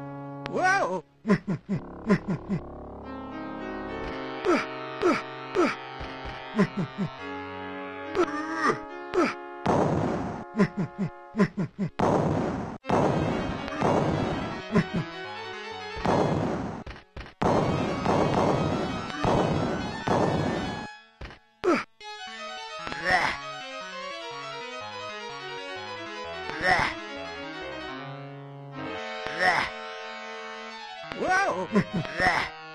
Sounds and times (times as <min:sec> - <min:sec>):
Music: 0:00.0 - 0:11.5, 0:12.8 - 0:32.7.